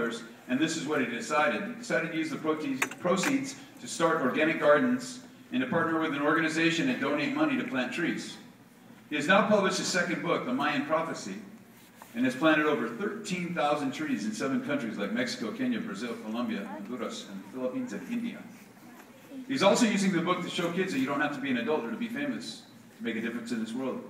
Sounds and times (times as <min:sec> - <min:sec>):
Male speech, man speaking: 0:00.0 - 0:08.4, 0:09.1 - 0:11.5, 0:12.2 - 0:18.5, 0:19.5 - 0:24.0
Narration, monologue: 0:00.0 - 0:24.0.